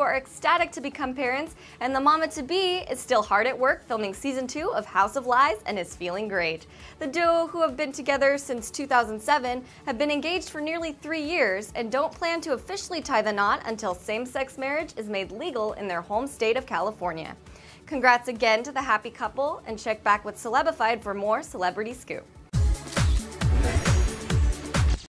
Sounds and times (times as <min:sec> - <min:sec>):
Speech: 0:00.0 - 0:22.3
Music: 0:00.0 - 0:25.1.